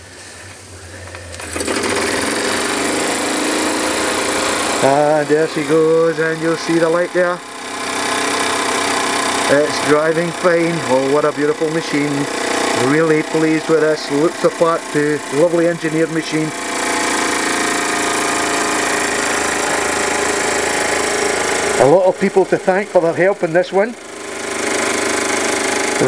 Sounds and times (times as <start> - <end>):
Speech: 4.8 - 7.4, 9.5 - 16.5, 21.8 - 24.0.